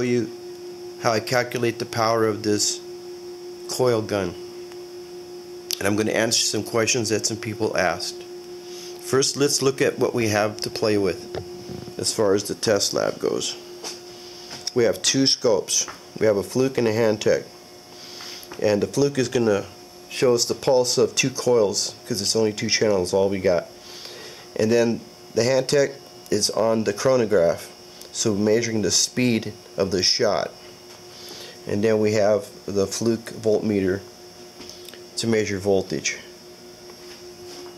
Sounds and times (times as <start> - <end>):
Speech: 0.0 - 0.4, 1.0 - 2.8, 3.7 - 4.4, 5.7 - 8.2, 9.0 - 11.3, 12.0 - 13.6, 14.7 - 17.5, 18.6 - 23.7, 24.6 - 30.6, 31.7 - 34.1, 35.2 - 36.3.